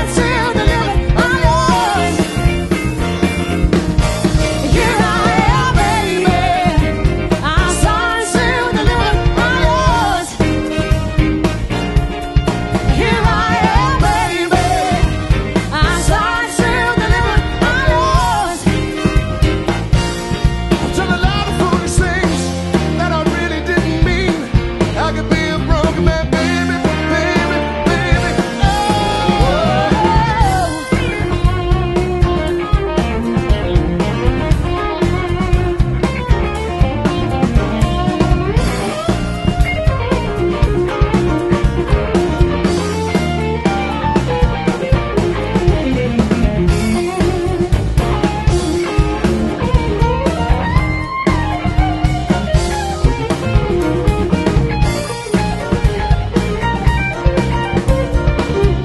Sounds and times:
Funk: 0.0s - 58.8s.

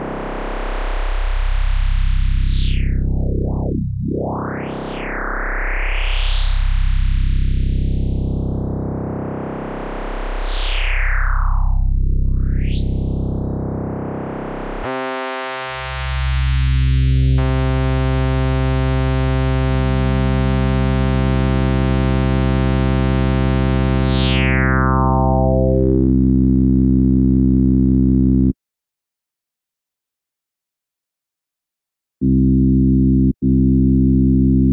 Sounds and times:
Synthesizer: 0.0s - 26.4s.

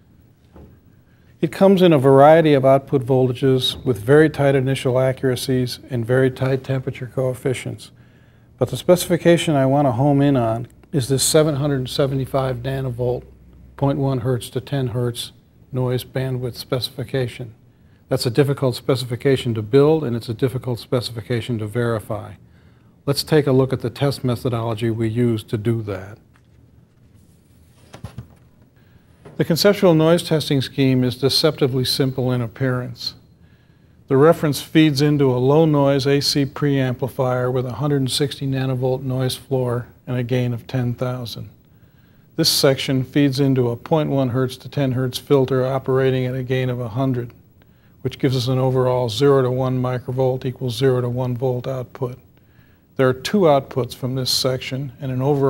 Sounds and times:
Speech: 1.4s - 8.0s, 8.6s - 22.4s, 23.0s - 26.2s, 29.4s - 33.2s, 34.1s - 41.6s, 42.4s - 47.4s, 48.0s - 52.3s, 53.0s - 55.5s.

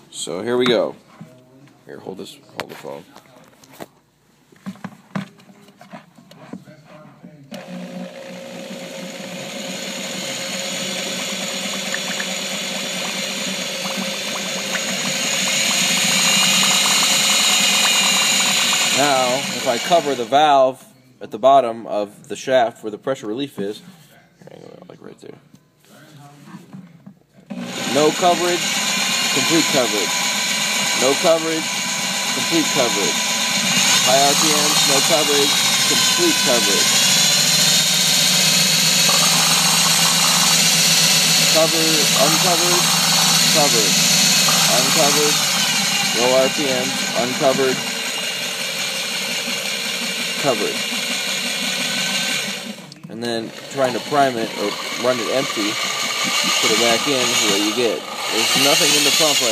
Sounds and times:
Pump (liquid): 7.6s - 20.4s, 27.5s - 59.5s.

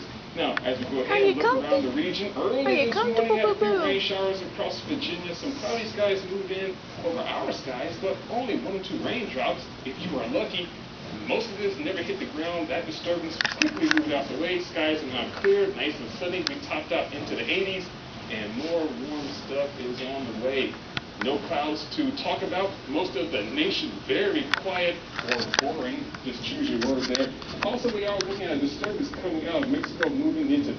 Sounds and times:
Speech: 0.4s - 30.7s.

